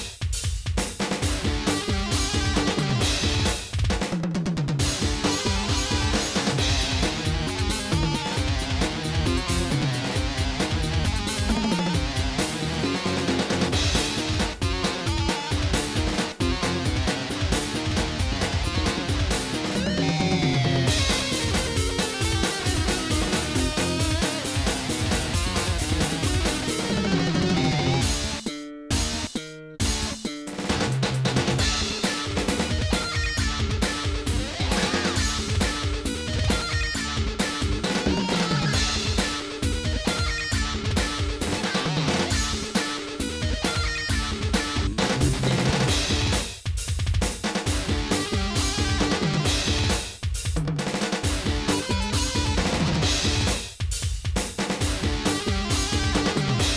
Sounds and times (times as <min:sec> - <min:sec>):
Blues: 0:00.0 - 0:56.7
Rhythm and blues: 0:00.0 - 0:56.7
Exciting music: 0:01.2 - 0:03.8, 0:04.6 - 0:28.4, 0:29.0 - 0:46.5, 0:47.6 - 0:50.0, 0:51.2 - 0:53.6, 0:54.7 - 0:56.7.